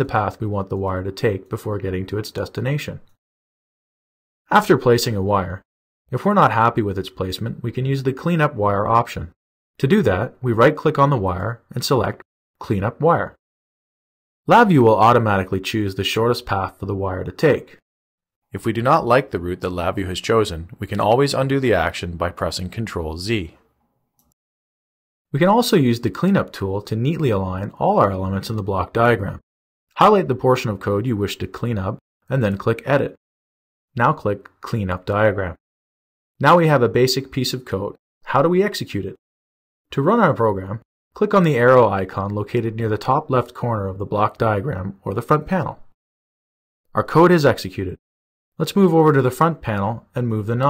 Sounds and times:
Speech synthesizer: 0:00.0 - 0:03.1, 0:04.5 - 0:05.6, 0:06.2 - 0:13.4, 0:14.5 - 0:17.8, 0:18.6 - 0:23.6, 0:25.4 - 0:29.4, 0:30.0 - 0:33.2, 0:34.0 - 0:35.6, 0:36.4 - 0:39.2, 0:40.0 - 0:45.8, 0:47.0 - 0:48.0, 0:48.6 - 0:50.6.

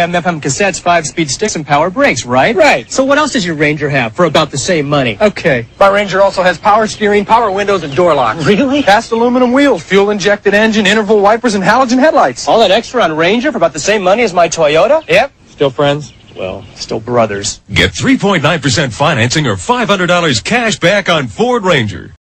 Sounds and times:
Speech: 0:00.0 - 0:22.2.

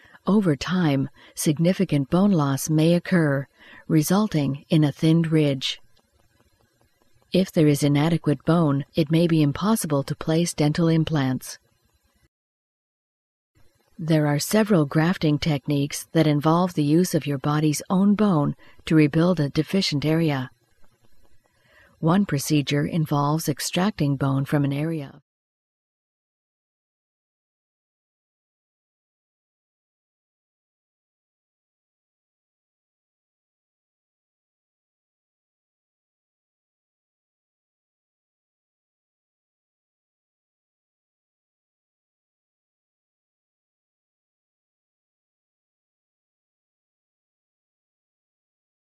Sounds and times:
Speech: 0:00.2 - 0:05.8, 0:07.4 - 0:11.6, 0:14.0 - 0:20.5, 0:22.0 - 0:25.2.

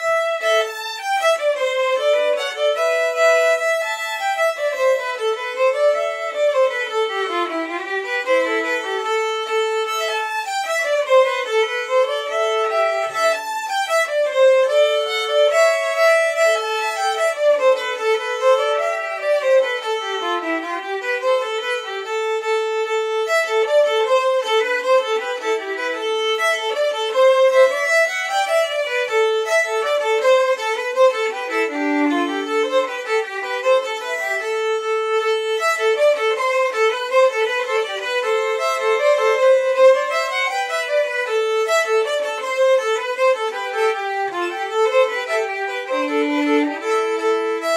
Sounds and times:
Violin, fiddle: 0:00.0 - 0:47.7.

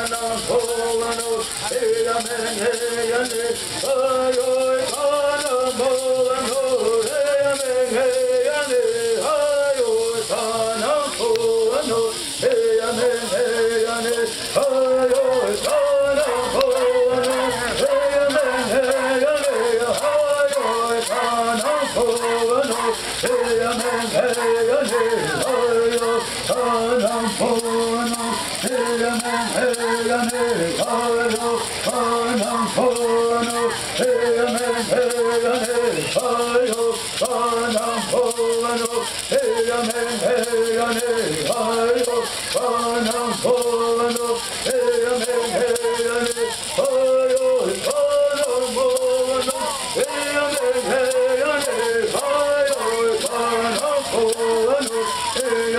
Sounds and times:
Male singing: 0:00.0 - 0:55.7
Music: 0:00.0 - 0:55.7.

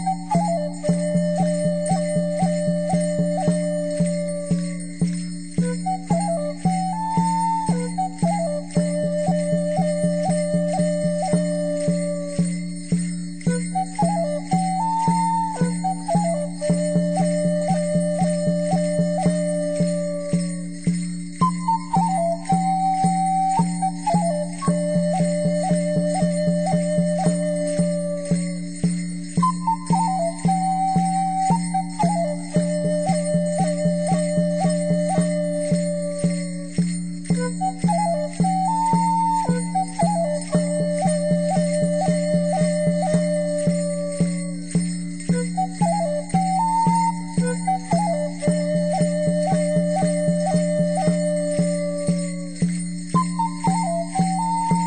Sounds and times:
Flute: 0:00.0 - 0:54.8.

